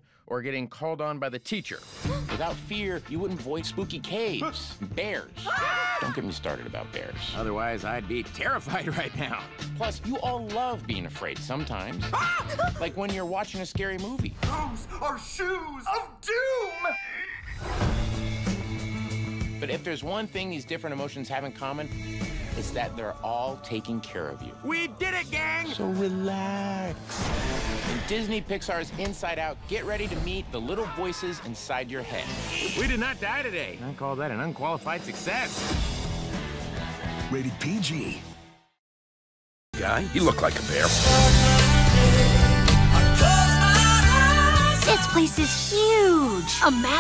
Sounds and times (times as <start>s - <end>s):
Speech: 0.3s - 1.8s, 12.8s - 17.0s, 19.6s - 21.9s, 22.6s - 26.9s, 37.3s - 38.2s, 39.8s - 40.9s
Music: 1.6s - 16.6s, 17.6s - 38.8s, 39.8s - 47.0s.